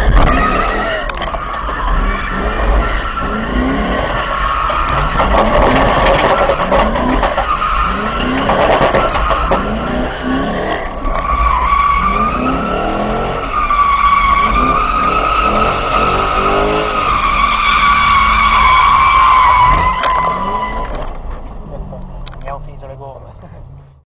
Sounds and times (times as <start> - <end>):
Speech: 22.4 - 23.6.